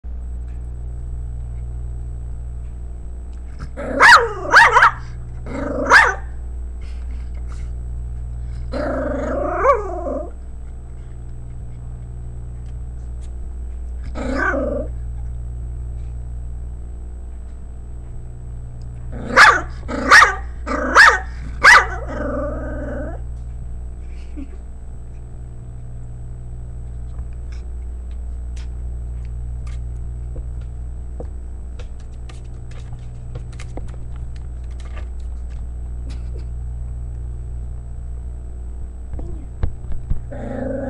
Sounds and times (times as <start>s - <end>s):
Bark: 3.9s - 5.1s, 5.8s - 6.3s, 19.3s - 22.1s.